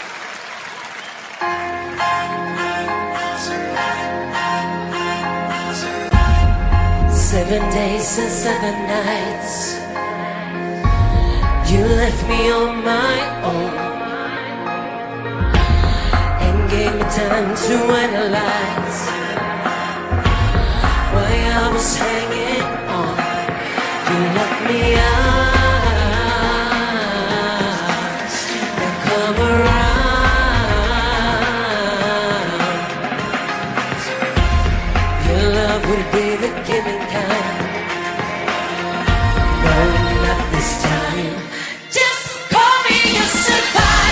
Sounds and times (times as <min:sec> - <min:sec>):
Pop music: 0:01.4 - 0:44.1
Singing: 0:02.0 - 0:44.1.